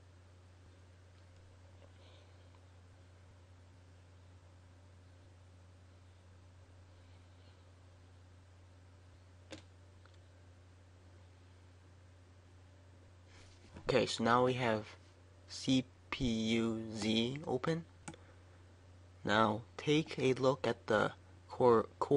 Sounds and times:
Speech: 0:13.8 - 0:17.9, 0:19.2 - 0:22.1.

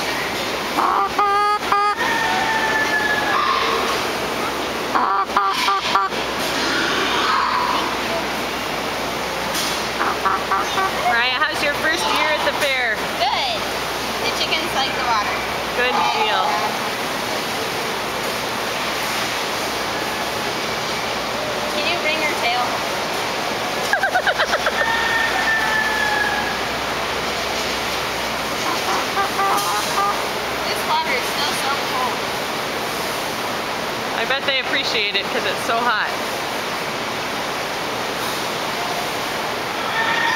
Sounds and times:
Chicken, rooster: 0:00.8 - 0:04.0, 0:05.0 - 0:08.0, 0:10.0 - 0:11.3, 0:23.8 - 0:26.7, 0:28.6 - 0:30.2, 0:39.8 - 0:40.3.

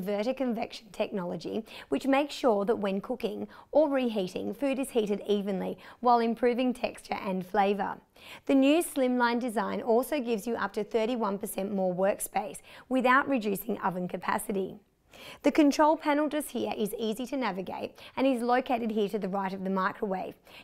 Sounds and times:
Speech: 0:00.0 - 0:14.8, 0:15.4 - 0:20.4.

